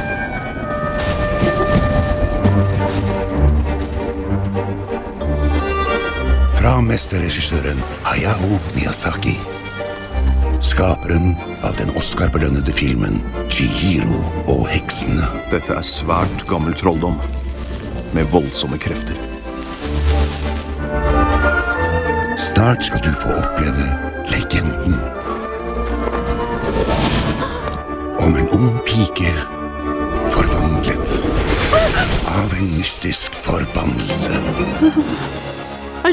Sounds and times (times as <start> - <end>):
Music: 0.0 - 36.1
Speech: 28.2 - 29.5, 30.3 - 31.2, 32.3 - 34.5.